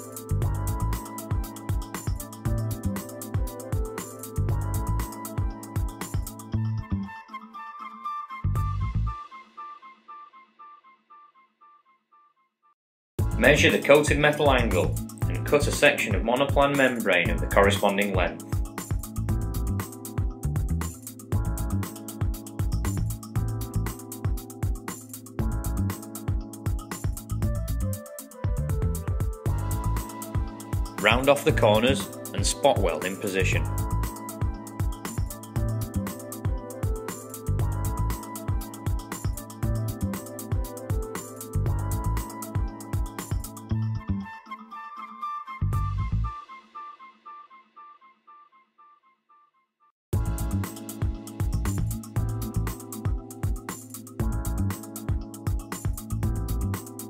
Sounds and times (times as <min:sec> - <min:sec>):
Music: 0:00.0 - 0:49.4, 0:50.1 - 0:57.1
Speech: 0:13.4 - 0:18.4, 0:31.0 - 0:33.7.